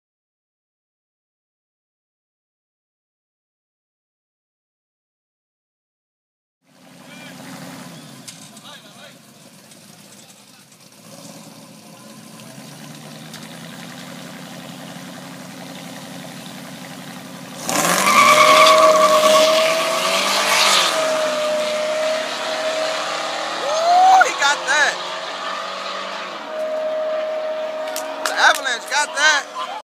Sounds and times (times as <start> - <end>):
Vehicle: 6.6 - 29.8
Speech: 8.6 - 9.2, 24.1 - 25.0, 28.2 - 29.8.